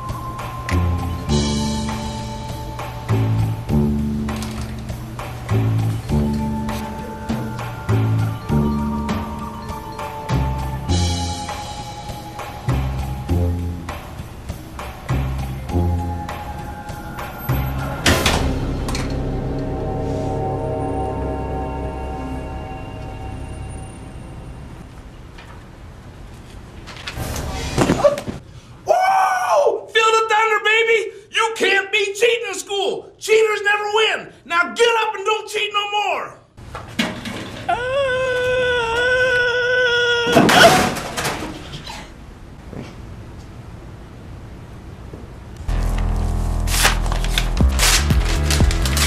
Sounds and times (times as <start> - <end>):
Speech: 29.4 - 36.5.